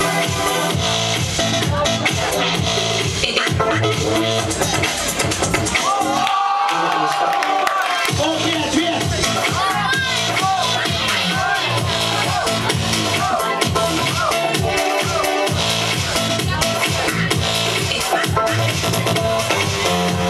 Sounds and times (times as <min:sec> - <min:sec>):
Music: 0:00.0 - 0:20.3
Speech: 0:06.7 - 0:19.4.